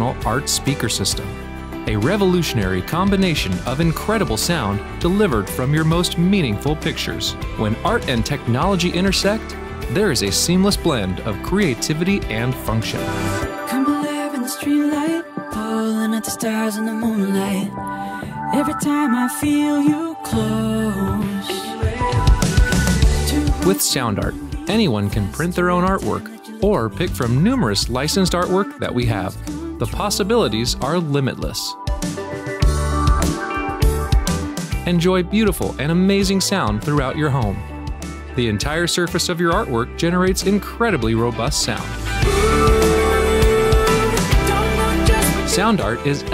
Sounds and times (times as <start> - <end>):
Speech: 0.0 - 13.2, 23.3 - 31.8, 34.8 - 37.6, 38.4 - 42.0, 45.2 - 46.3
Exciting music: 0.0 - 26.1, 26.7 - 40.3, 41.0 - 46.3.